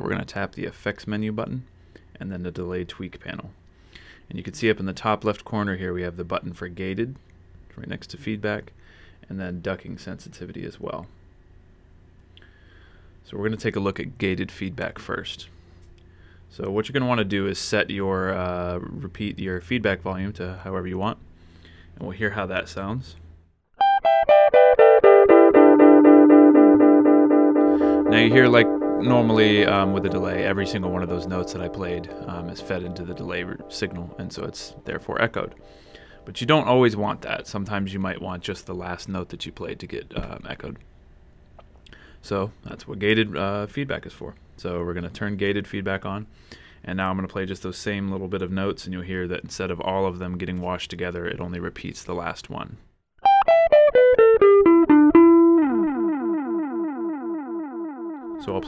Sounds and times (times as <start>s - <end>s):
Speech: 0.0s - 3.6s, 4.3s - 11.1s, 13.2s - 15.5s, 16.5s - 21.2s, 22.0s - 23.2s, 28.1s - 35.6s, 36.2s - 40.8s, 42.2s - 52.8s, 58.4s - 58.6s.